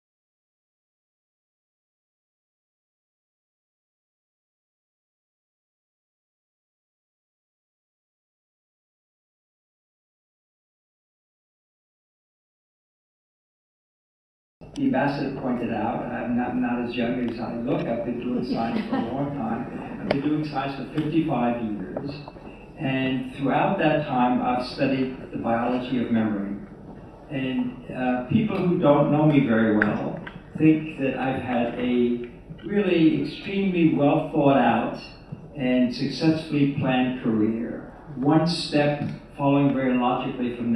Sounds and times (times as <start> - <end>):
Male speech, man speaking: 14.8 - 22.2, 22.8 - 26.7, 27.3 - 40.7.